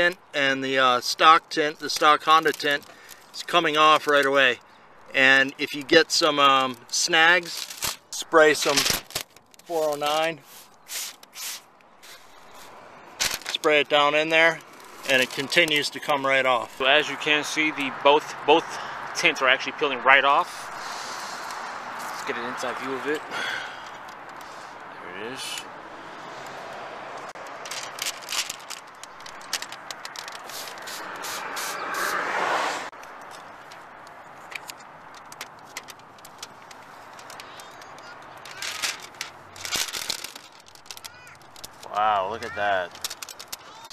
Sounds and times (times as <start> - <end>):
Speech: 0.0 - 2.8, 3.4 - 7.6, 13.5 - 20.6, 22.2 - 23.2, 25.0 - 25.6, 41.8 - 42.9
Car: 0.0 - 43.9
Crackle: 7.4 - 11.3, 33.0 - 42.0, 42.9 - 43.9.